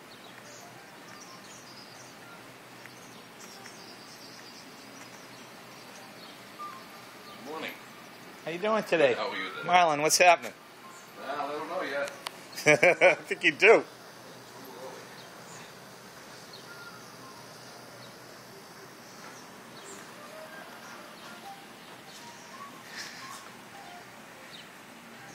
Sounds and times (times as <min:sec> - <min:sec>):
Environmental noise: 0:00.0 - 0:25.3.